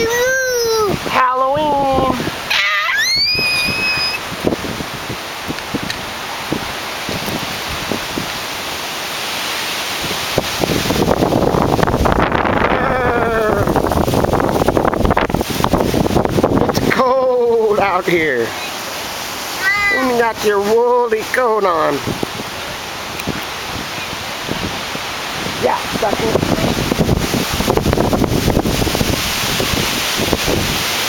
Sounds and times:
Child speech, kid speaking: 0:00.0 - 0:02.2, 0:19.5 - 0:20.9.

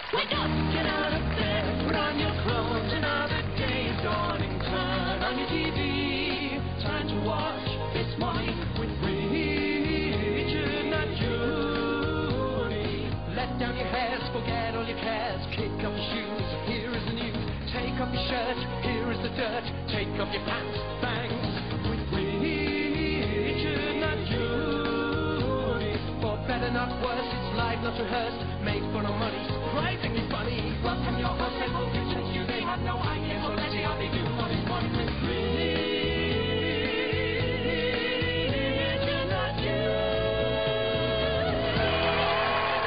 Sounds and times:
Music: 0:00.0 - 0:42.8.

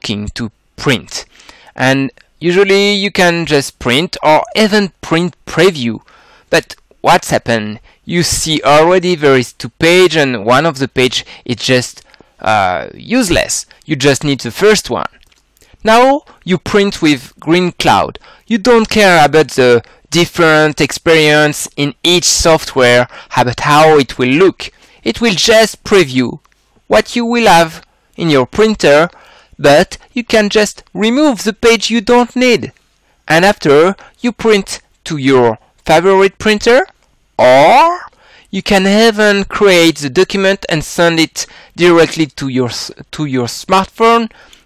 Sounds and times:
Speech: 0:00.0 - 0:15.2, 0:15.8 - 0:44.4.

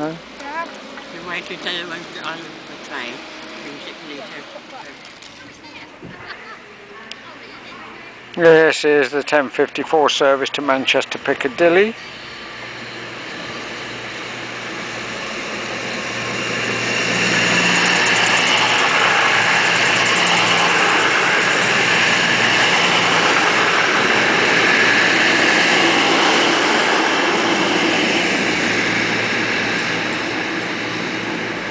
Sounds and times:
Railroad car, train wagon: 0:00.0 - 0:31.7
Train: 0:00.0 - 0:31.7.

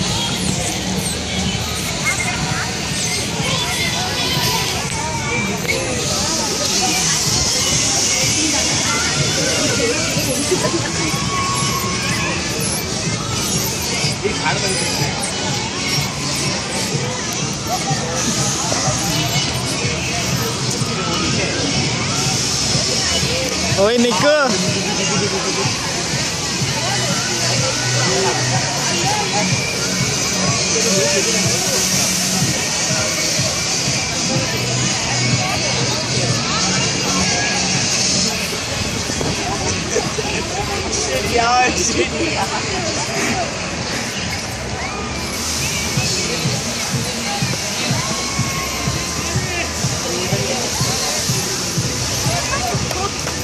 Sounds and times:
Music: 0:00.0 - 0:53.4
Speech: 0:00.0 - 0:53.4.

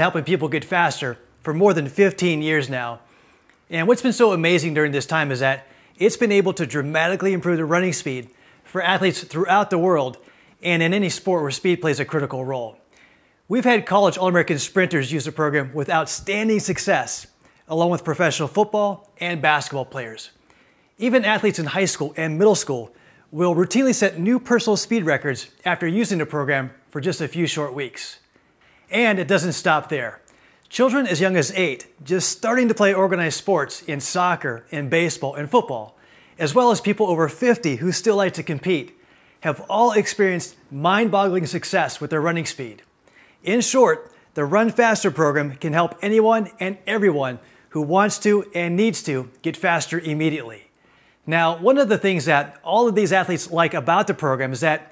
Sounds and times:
Speech: 0:00.0 - 0:03.1, 0:03.7 - 0:12.8, 0:13.5 - 0:20.4, 0:21.0 - 0:28.3, 0:28.9 - 0:50.7, 0:51.3 - 0:54.9.

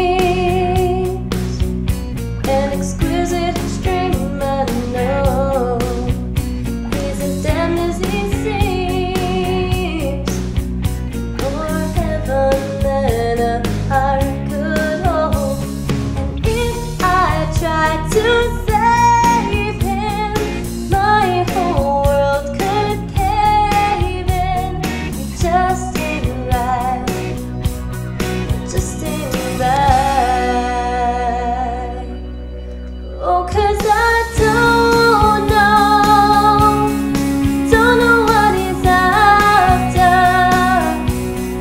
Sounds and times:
Female singing: 0:00.0 - 0:01.3, 0:02.5 - 0:06.1, 0:06.9 - 0:10.4, 0:11.4 - 0:15.6, 0:16.4 - 0:27.2, 0:28.7 - 0:32.2, 0:33.2 - 0:37.0, 0:37.6 - 0:41.6
Music: 0:00.0 - 0:41.6.

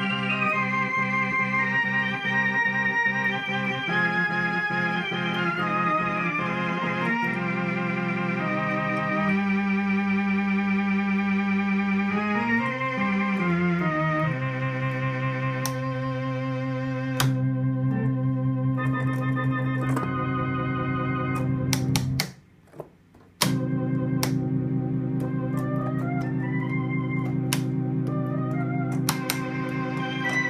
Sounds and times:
Electric piano: 0:00.0 - 0:22.3, 0:23.4 - 0:30.5
Electronic organ: 0:00.0 - 0:22.4, 0:23.3 - 0:30.5.

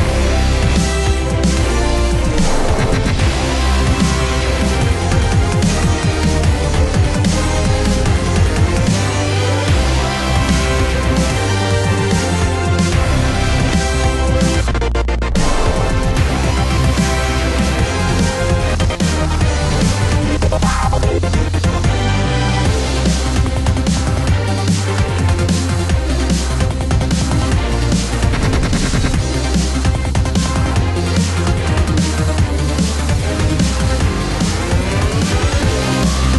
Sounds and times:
Background music: 0:00.0 - 0:36.3.

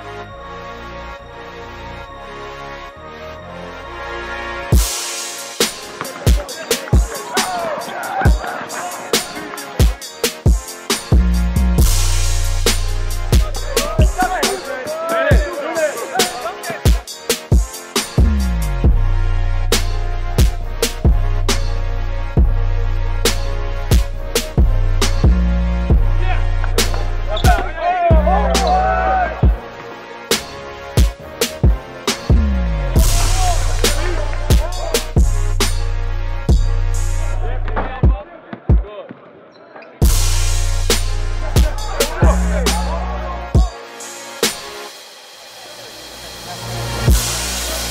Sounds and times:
Music: 0:00.0 - 0:39.0, 0:39.7 - 0:47.9
Speech: 0:13.6 - 0:16.6, 0:37.4 - 0:40.0, 0:41.8 - 0:43.7.

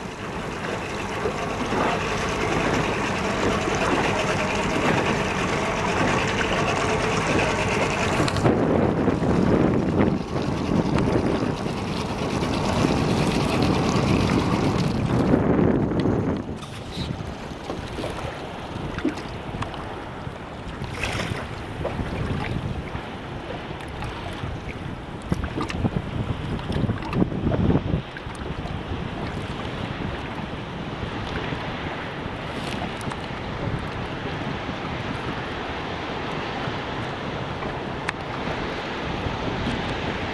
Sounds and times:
Ocean: 0:00.0 - 0:40.3
Ship: 0:00.0 - 0:40.3.

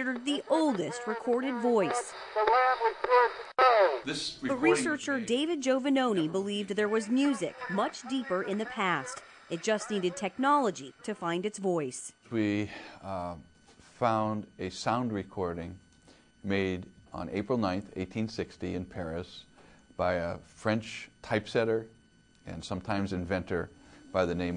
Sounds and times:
Speech: 0:03.8 - 0:13.4, 0:14.0 - 0:15.8, 0:22.5 - 0:24.5.

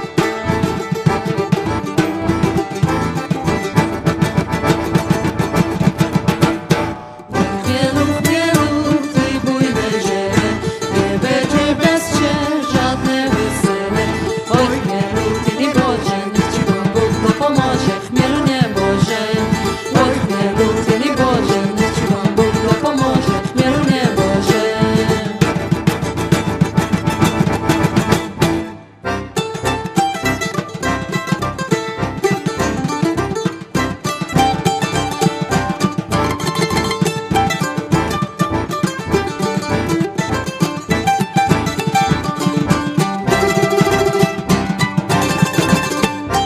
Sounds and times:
Music: 0:00.0 - 0:46.4.

